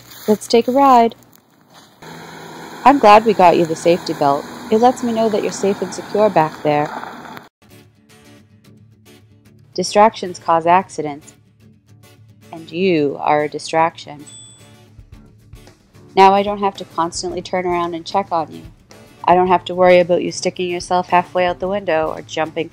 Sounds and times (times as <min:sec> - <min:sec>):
Speech: 0:00.3 - 0:01.2, 0:02.9 - 0:06.9, 0:09.8 - 0:11.3, 0:12.6 - 0:14.2, 0:16.2 - 0:22.7
Music: 0:07.6 - 0:22.7.